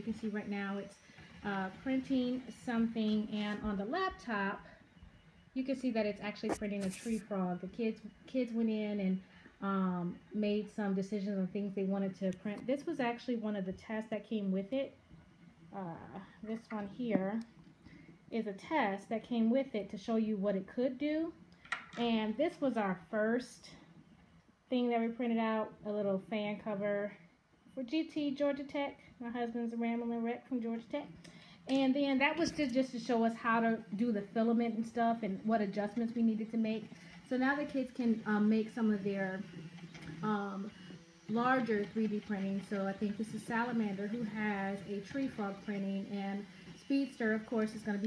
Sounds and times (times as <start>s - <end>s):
Speech: 0.0s - 4.8s, 5.6s - 15.0s, 15.7s - 17.5s, 18.3s - 21.4s, 22.0s - 23.9s, 24.7s - 39.6s, 40.2s - 48.0s.